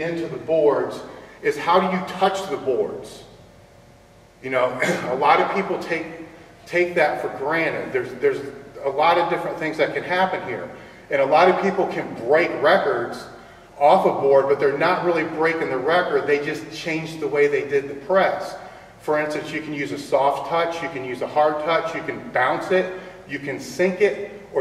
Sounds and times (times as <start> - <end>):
Speech: 0.0 - 3.3, 4.4 - 24.6.